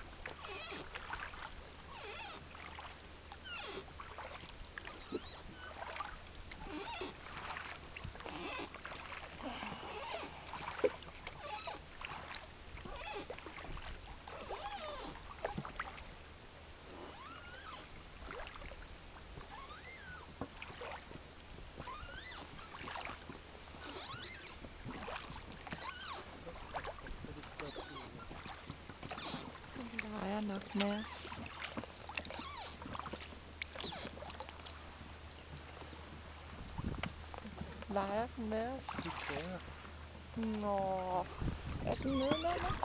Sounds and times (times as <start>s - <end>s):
Boat, Water vehicle: 0.0s - 42.8s.